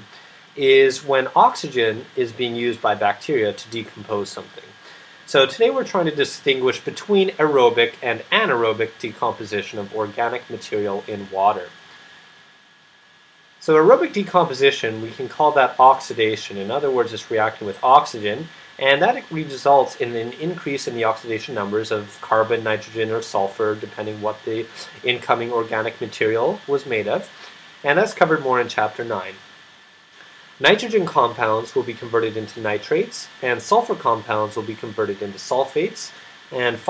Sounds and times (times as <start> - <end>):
Speech: 0.0 - 11.8, 13.6 - 29.4, 30.6 - 36.8.